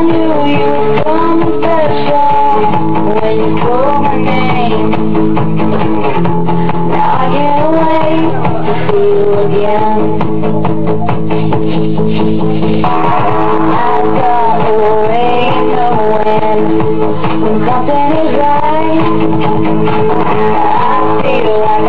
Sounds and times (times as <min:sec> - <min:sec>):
Music: 0:00.0 - 0:21.8.